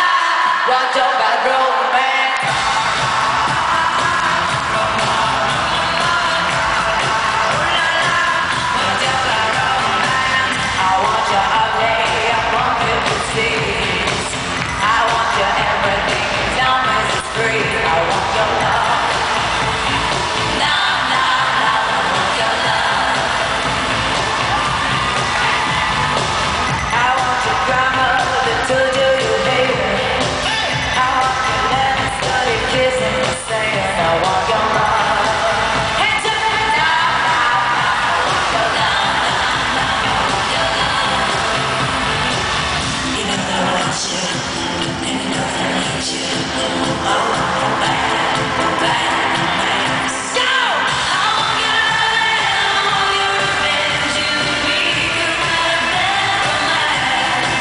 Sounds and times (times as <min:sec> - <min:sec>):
Music: 0:02.4 - 0:57.6.